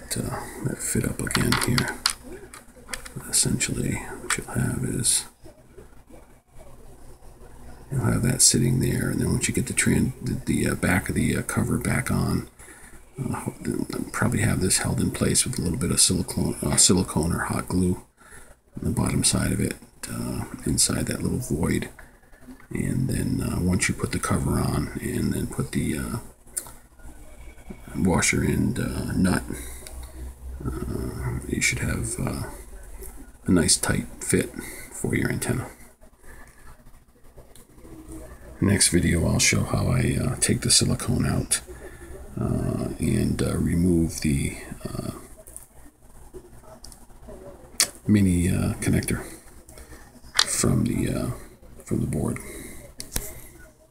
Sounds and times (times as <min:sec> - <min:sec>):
Speech: 0:00.0 - 0:12.5, 0:13.2 - 0:18.1, 0:18.8 - 0:22.0, 0:22.6 - 0:36.0, 0:37.6 - 0:53.9
Inside, small room: 0:00.0 - 0:53.9.